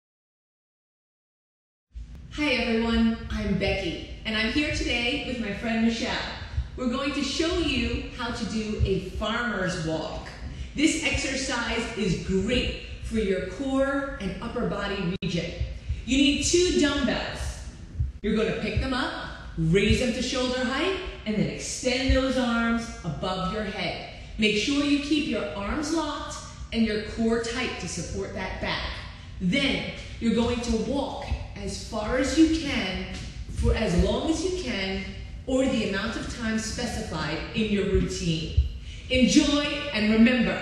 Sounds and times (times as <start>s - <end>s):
Speech: 2.3s - 40.6s.